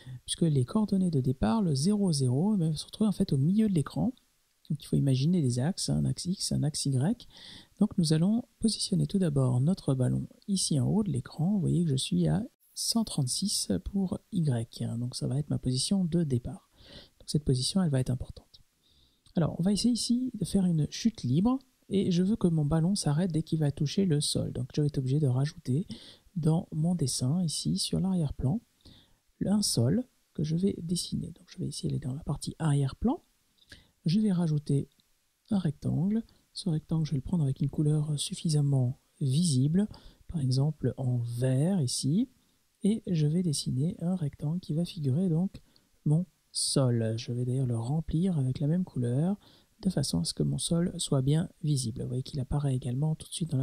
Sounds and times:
Speech: 0:00.0 - 0:18.6, 0:19.3 - 0:28.7, 0:29.4 - 0:33.3, 0:34.0 - 0:53.6.

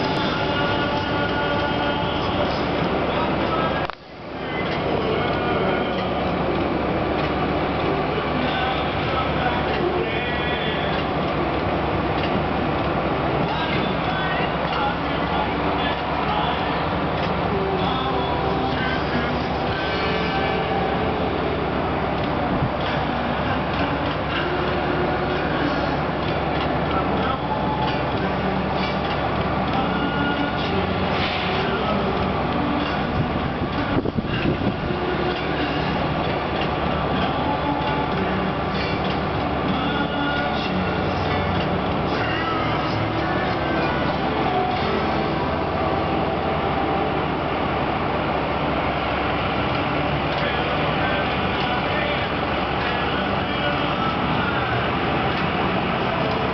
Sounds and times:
Vehicle: 0:00.0 - 0:56.5.

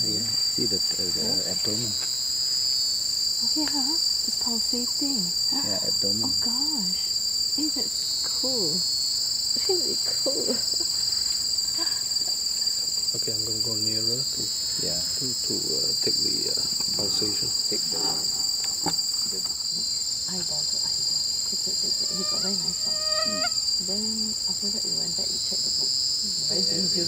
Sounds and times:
Speech: 0:00.0 - 0:02.0, 0:03.4 - 0:07.0, 0:07.6 - 0:08.8, 0:09.6 - 0:10.7, 0:13.2 - 0:18.4, 0:20.3 - 0:27.0
Insect: 0:00.0 - 0:27.0
Outside, rural or natural: 0:00.0 - 0:27.0.

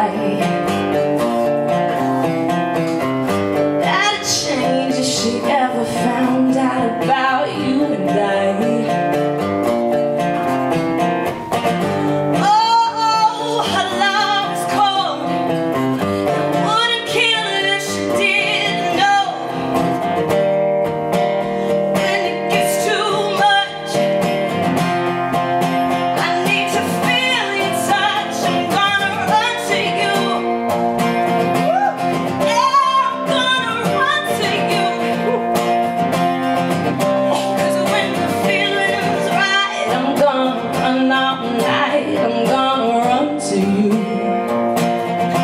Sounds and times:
Music: 0:00.0 - 0:45.4.

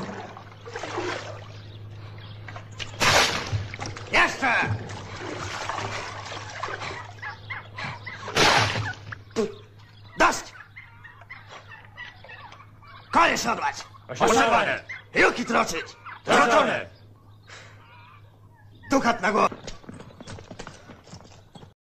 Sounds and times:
Speech: 0:18.9 - 0:19.5.

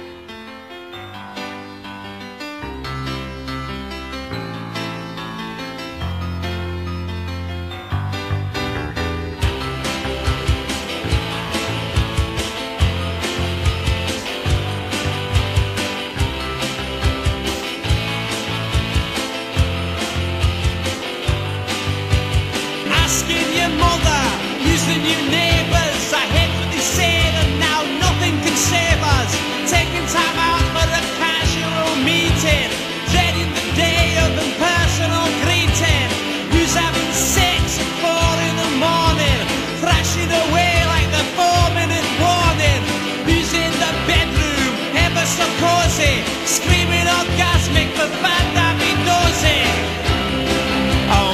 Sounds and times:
Music: 0:00.0 - 0:51.3.

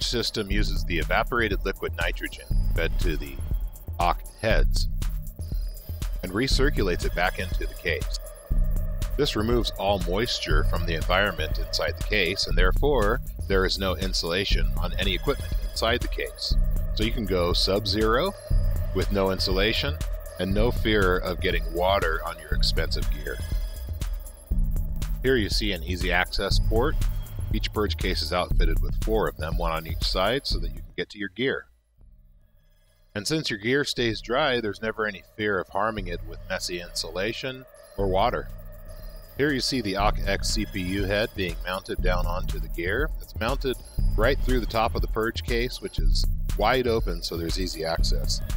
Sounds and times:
Speech: 0:00.0 - 0:03.4, 0:04.0 - 0:04.9, 0:06.2 - 0:08.2, 0:09.2 - 0:23.5, 0:25.2 - 0:31.7, 0:33.2 - 0:38.5, 0:39.4 - 0:48.4
Music: 0:00.0 - 0:31.0, 0:32.0 - 0:48.5.

